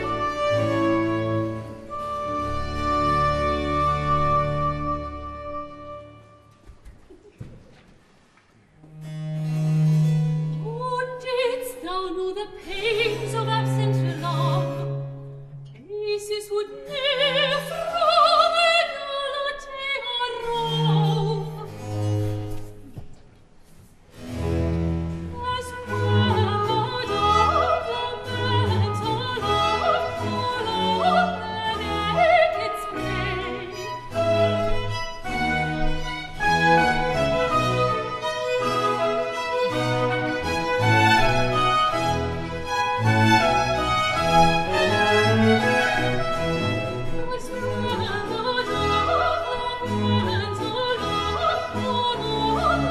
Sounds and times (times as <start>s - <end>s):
Music: 0.0s - 6.7s, 8.8s - 23.1s, 24.1s - 52.9s.